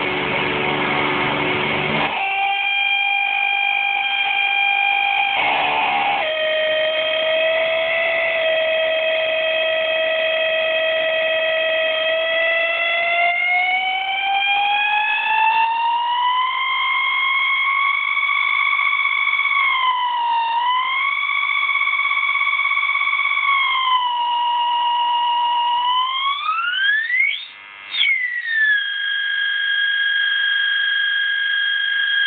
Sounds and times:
Distortion: 0.0 - 32.2.

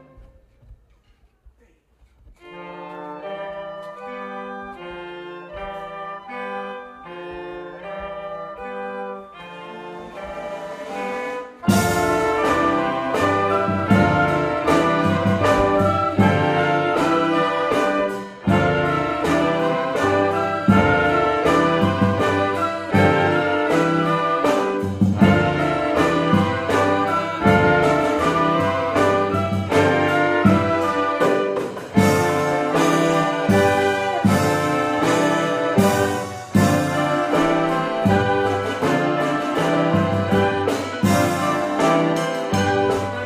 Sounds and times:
Trumpet: 2.3 - 43.2.

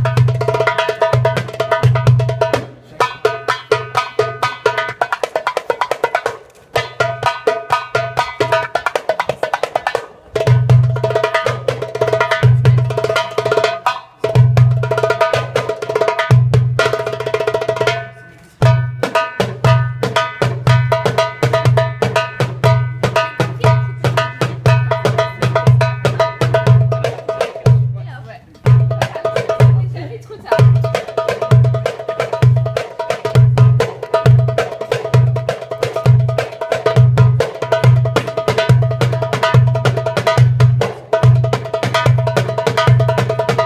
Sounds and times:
Wood block: 0.0 - 27.9, 30.5 - 43.6.

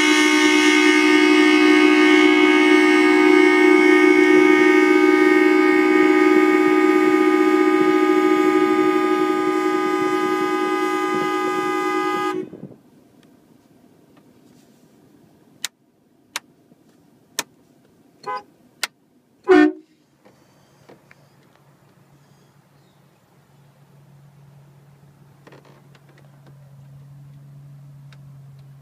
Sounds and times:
Vehicle horn, car horn, honking: 0.0 - 12.6, 18.2 - 18.5, 19.4 - 20.8.

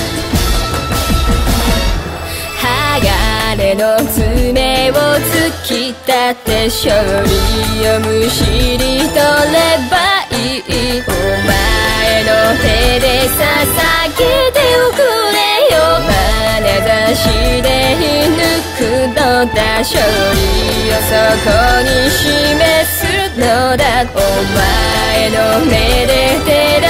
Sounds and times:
Music: 0.0 - 26.9.

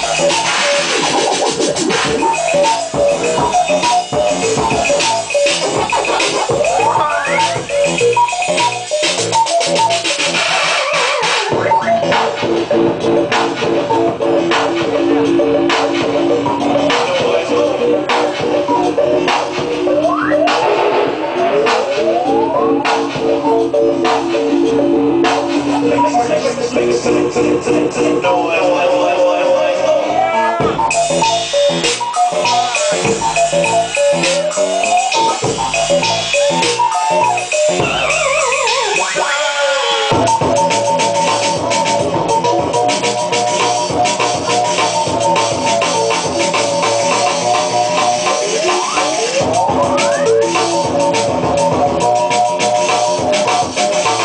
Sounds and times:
Music: 0.0 - 54.2.

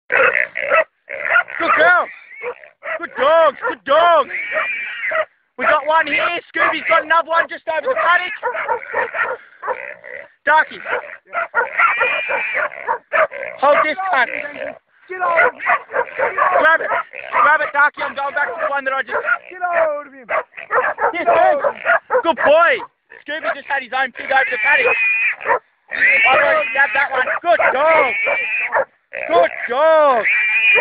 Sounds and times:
Dog: 0.1 - 3.8, 4.5 - 9.8, 10.8 - 14.0, 15.2 - 23.6, 24.8 - 25.6, 27.2 - 28.9
Pig: 0.1 - 7.1, 7.8 - 30.8
Speech: 1.6 - 2.2, 2.9 - 4.3, 5.6 - 8.4, 10.4 - 11.0, 13.6 - 15.6, 16.2 - 20.3, 21.1 - 25.0, 25.9 - 28.2, 29.2 - 30.3.

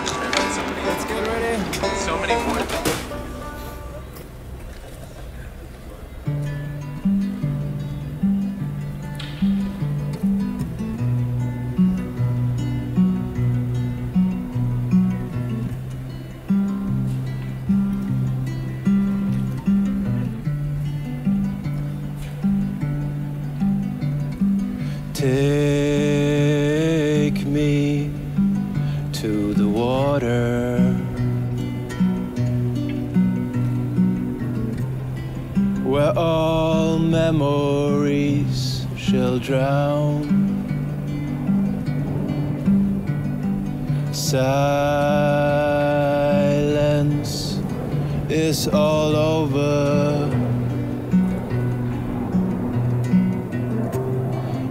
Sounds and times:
Music: 0.0 - 4.8, 6.1 - 54.7.

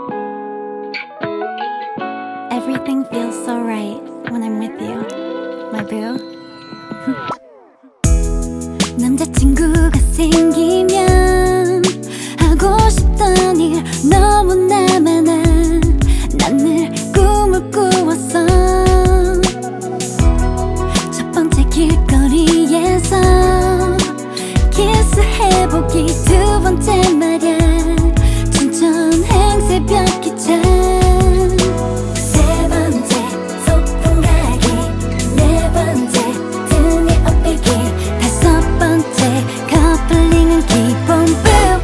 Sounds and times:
Music: 0.0 - 41.8.

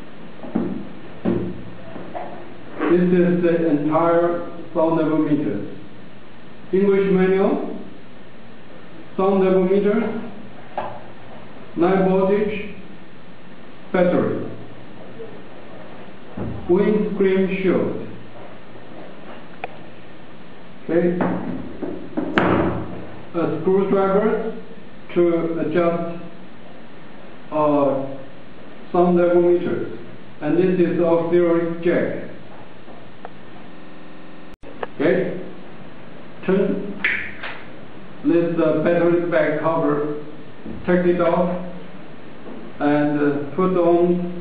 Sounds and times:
Speech: 1.8 - 5.8, 6.7 - 7.9, 9.2 - 10.4, 11.8 - 12.8, 13.9 - 15.4, 16.6 - 18.1, 20.9 - 21.4, 23.3 - 26.4, 27.5 - 28.3, 28.9 - 32.4, 34.9 - 35.6, 36.4 - 37.0, 38.2 - 41.8, 42.8 - 44.4.

